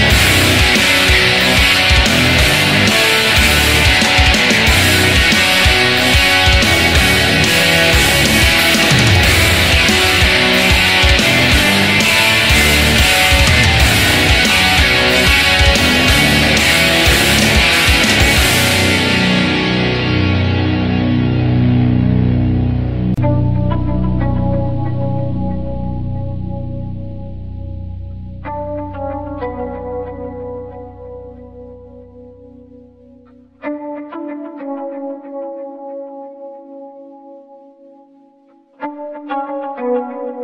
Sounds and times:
Rock music: 0.0s - 35.7s.

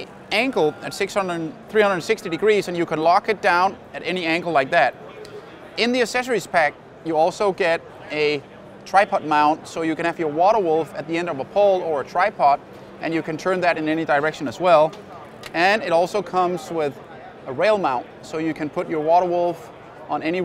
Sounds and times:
Speech: 0.0s - 20.4s.

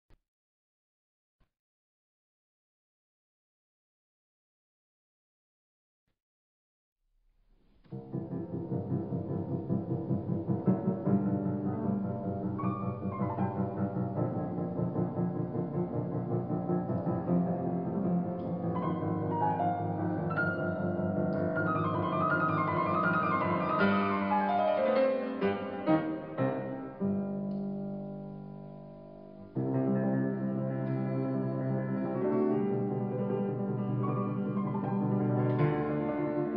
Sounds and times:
Piano: 7.4s - 36.5s.

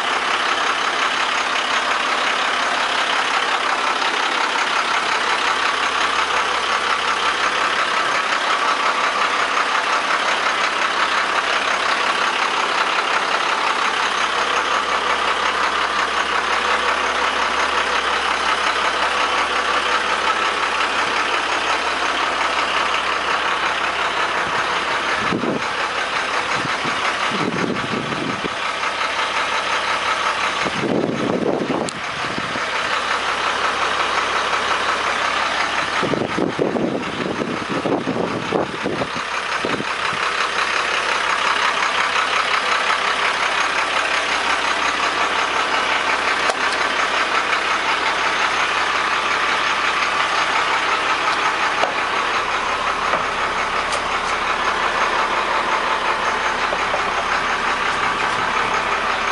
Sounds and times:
Vehicle: 0.0s - 59.3s.

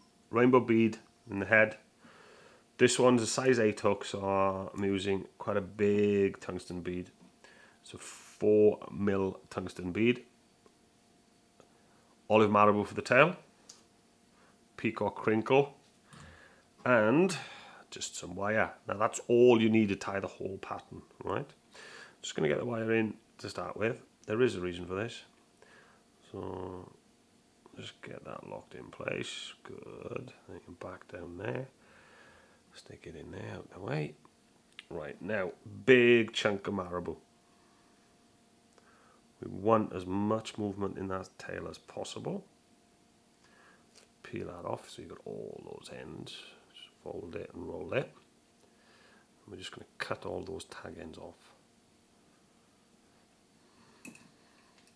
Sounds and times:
Speech: 0.3s - 1.9s, 2.8s - 7.2s, 7.8s - 10.3s, 12.3s - 13.5s, 14.8s - 15.8s, 16.8s - 21.6s, 22.2s - 25.4s, 26.2s - 27.0s, 27.7s - 31.8s, 32.7s - 37.2s, 39.4s - 42.5s, 44.2s - 48.2s, 49.5s - 51.6s.

